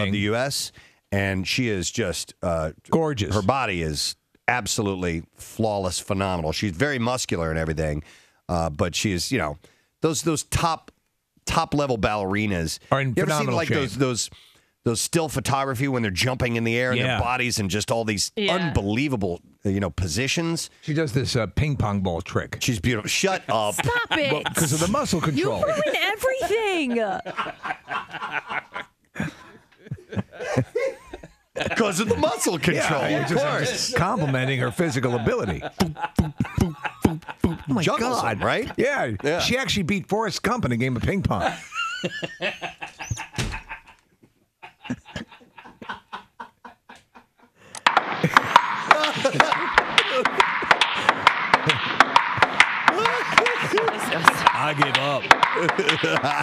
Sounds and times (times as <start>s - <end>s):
Speech: 0.0s - 10.9s, 11.5s - 27.2s, 31.6s - 41.6s, 52.9s - 56.4s.